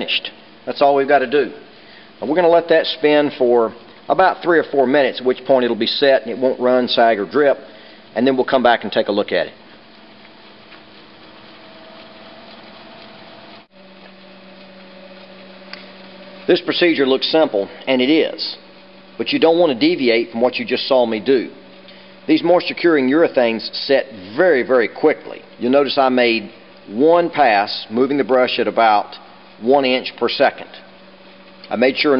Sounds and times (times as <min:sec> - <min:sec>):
Speech: 0:00.0 - 0:01.6, 0:02.2 - 0:09.6, 0:16.5 - 0:18.6, 0:19.2 - 0:21.6, 0:22.3 - 0:30.9, 0:31.7 - 0:32.1.